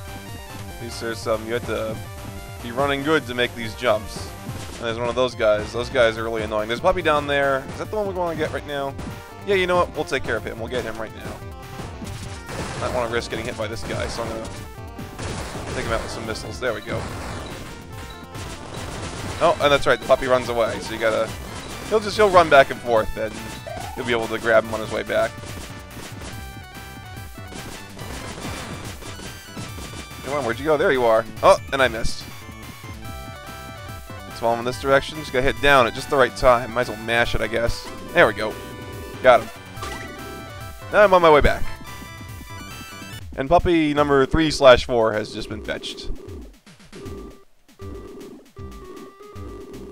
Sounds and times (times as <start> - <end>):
Speech: 0.8 - 2.0, 2.6 - 8.9, 9.5 - 11.4, 12.8 - 14.5, 15.7 - 17.0, 19.4 - 21.3, 21.9 - 25.3, 30.2 - 32.2, 34.4 - 38.6, 39.2 - 39.5, 40.9 - 41.7, 43.4 - 46.1.